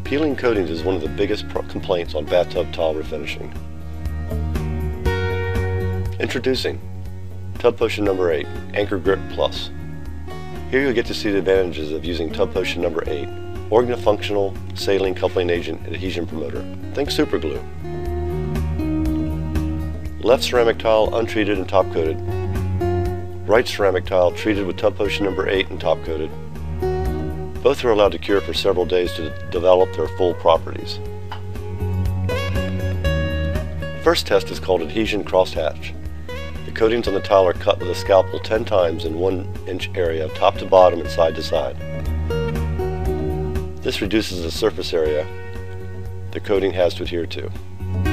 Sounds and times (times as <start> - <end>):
Music: 0.0 - 48.1
Speech: 0.1 - 3.6, 6.2 - 6.8, 7.6 - 9.7, 10.7 - 17.7, 20.2 - 22.2, 23.5 - 26.3, 27.6 - 31.0, 34.0 - 36.0, 36.7 - 41.8, 43.8 - 45.3, 46.3 - 47.6.